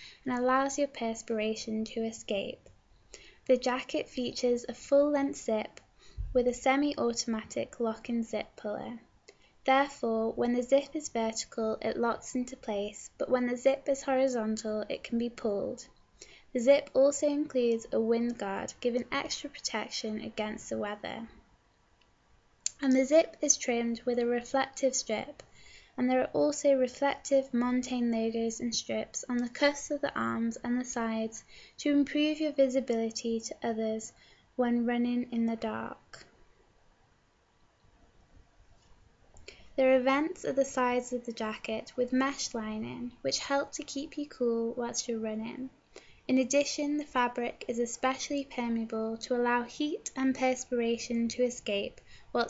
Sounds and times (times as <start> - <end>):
Speech: 0.2 - 2.7, 3.5 - 15.9, 16.6 - 21.4, 22.7 - 25.4, 26.0 - 36.3, 39.8 - 52.4.